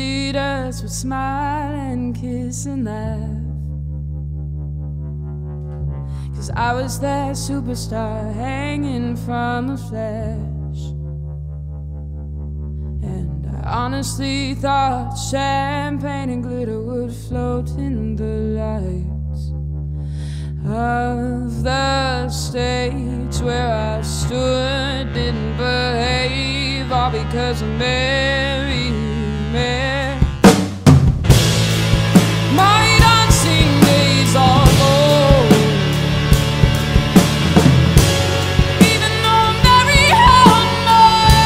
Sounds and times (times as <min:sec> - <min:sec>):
Music: 0:00.0 - 0:41.4.